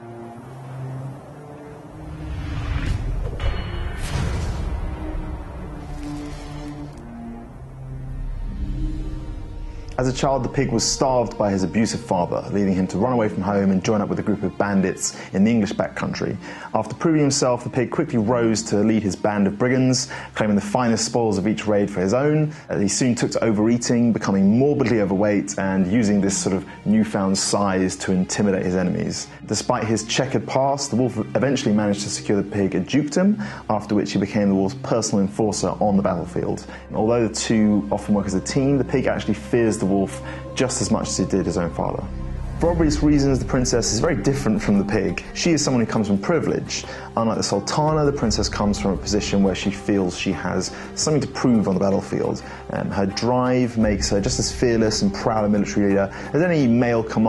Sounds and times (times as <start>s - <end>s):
Music: 0.0s - 57.2s
Speech: 10.0s - 57.2s.